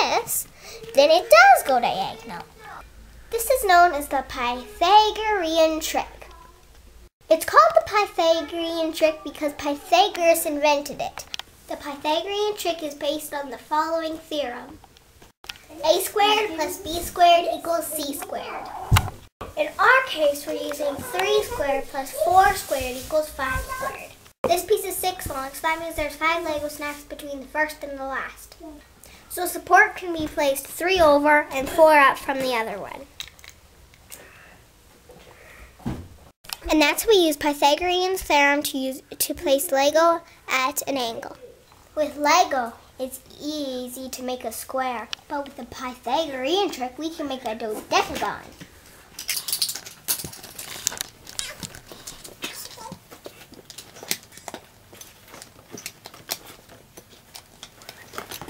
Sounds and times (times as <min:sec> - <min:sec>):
Child speech, kid speaking: 0:00.0 - 0:06.7, 0:07.3 - 0:14.8, 0:15.7 - 0:18.9, 0:19.5 - 0:33.1, 0:36.6 - 0:48.6, 0:52.5 - 0:53.0.